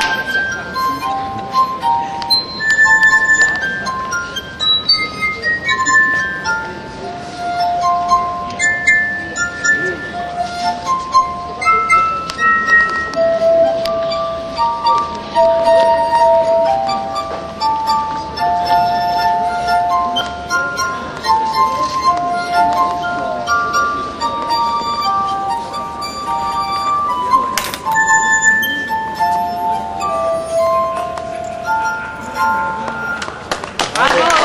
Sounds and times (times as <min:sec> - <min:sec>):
Music: 0:00.0 - 0:34.4.